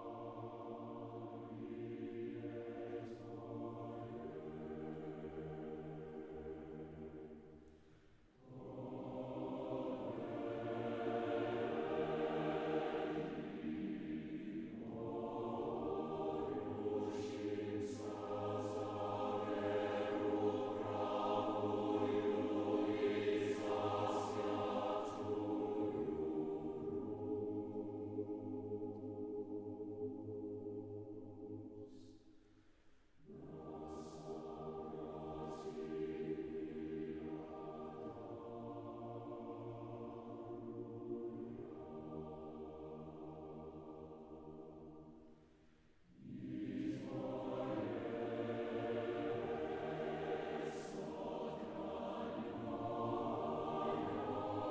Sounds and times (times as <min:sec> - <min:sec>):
Choir: 0:00.0 - 0:54.7.